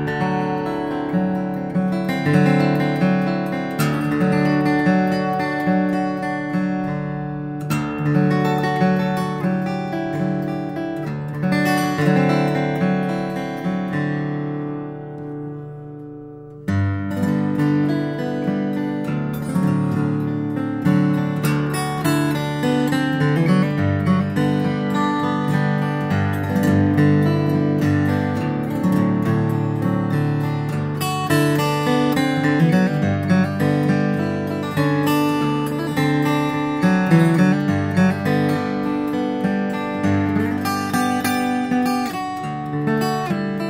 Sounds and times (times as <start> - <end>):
Acoustic guitar: 0.0 - 43.6.